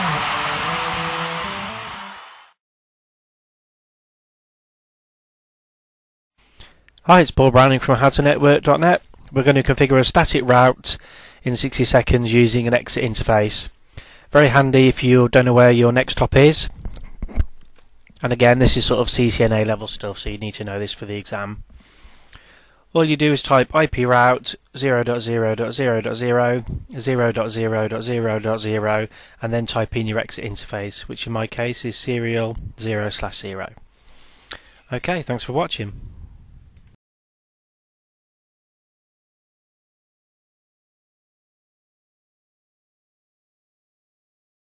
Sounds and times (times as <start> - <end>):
Speech: 7.0 - 16.7, 18.2 - 21.7, 22.9 - 33.8, 34.9 - 36.0.